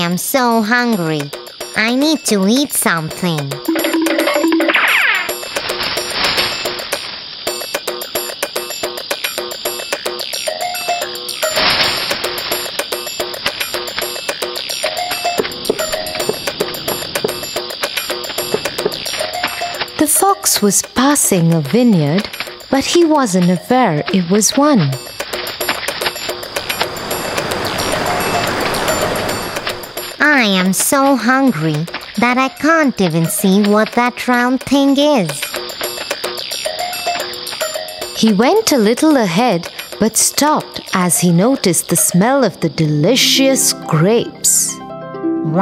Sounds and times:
Speech: 0.0s - 3.6s, 20.0s - 25.0s, 30.2s - 35.5s, 38.2s - 44.8s
Music for children: 0.1s - 45.6s.

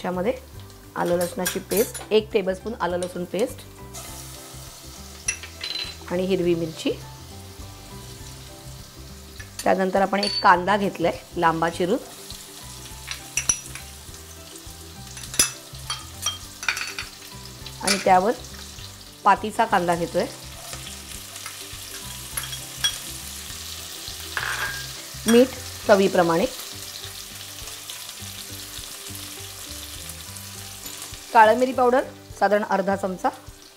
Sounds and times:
Music: 0.0s - 33.7s
Speech: 1.0s - 3.6s, 6.1s - 7.0s, 9.6s - 12.1s, 19.3s - 20.4s, 25.3s - 26.5s, 31.4s - 33.4s.

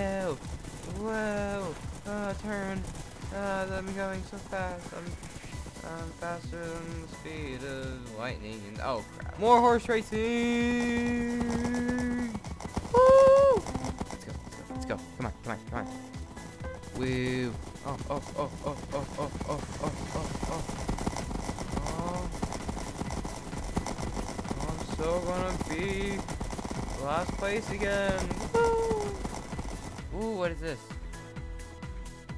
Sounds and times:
Speech: 0.0s - 5.2s, 5.8s - 12.4s, 17.0s - 20.6s, 21.8s - 22.3s, 24.6s - 26.2s, 27.0s - 29.2s, 30.1s - 30.9s
Clip-clop: 0.0s - 31.1s
Music: 0.0s - 32.3s.

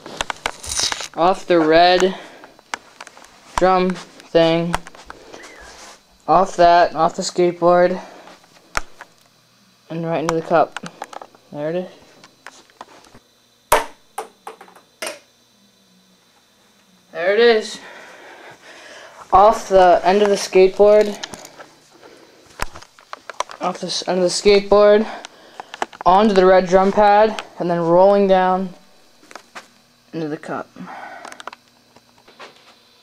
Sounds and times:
Speech: 19.3s - 21.2s, 23.6s - 25.2s, 26.1s - 28.8s, 30.1s - 30.7s.

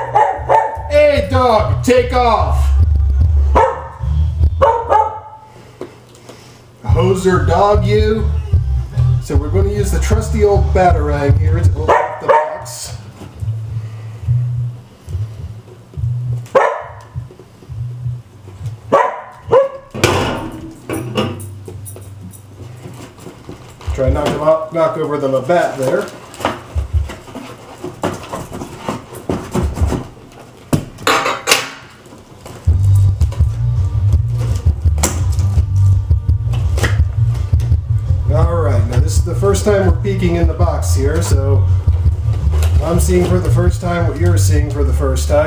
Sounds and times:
Music: 0.4s - 5.0s, 6.8s - 24.4s, 32.5s - 45.4s
Speech: 0.9s - 2.8s, 6.9s - 8.4s, 9.2s - 13.0s, 23.9s - 26.2s, 38.3s - 41.6s, 42.8s - 45.4s.

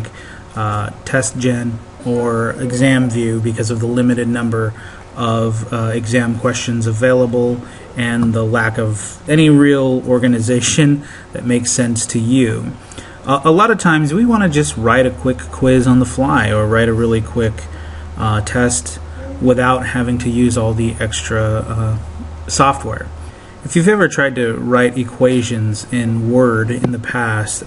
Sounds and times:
Speech: 0.0s - 27.6s.

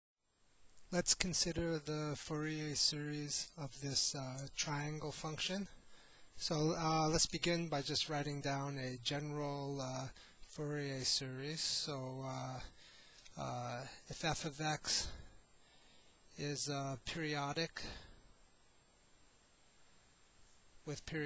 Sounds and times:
Narration, monologue: 0.7s - 21.2s.

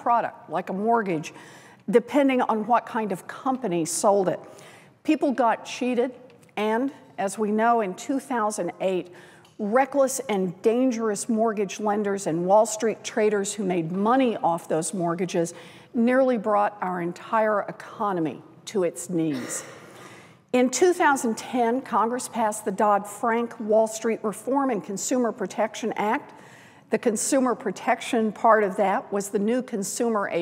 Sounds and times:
Female speech, woman speaking: 0.0s - 1.3s, 1.9s - 4.4s, 5.1s - 19.6s, 20.6s - 26.2s, 27.0s - 30.4s
Narration, monologue: 0.0s - 30.4s.

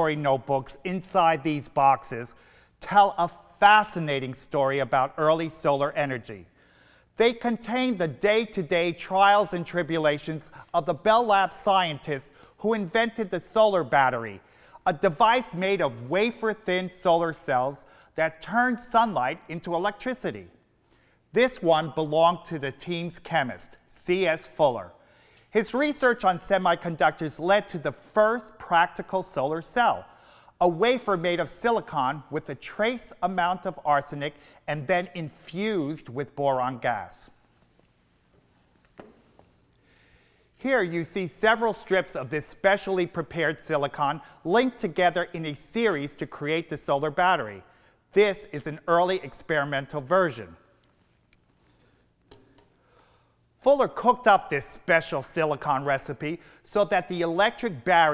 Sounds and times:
Speech: 0.0s - 6.5s, 7.2s - 20.6s, 21.3s - 37.4s, 40.6s - 50.6s, 53.6s - 58.1s.

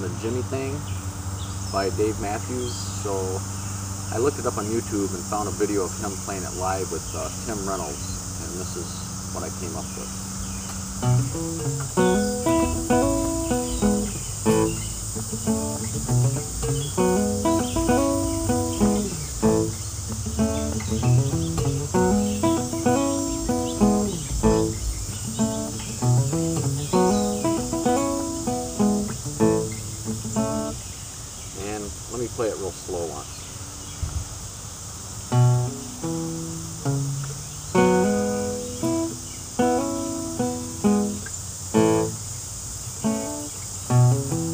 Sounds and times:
Speech: 0.0s - 0.9s, 1.7s - 3.4s, 4.1s - 10.1s, 31.6s - 33.3s
Guitar: 0.0s - 31.0s, 35.3s - 44.5s
Outside, rural or natural: 0.0s - 44.5s.

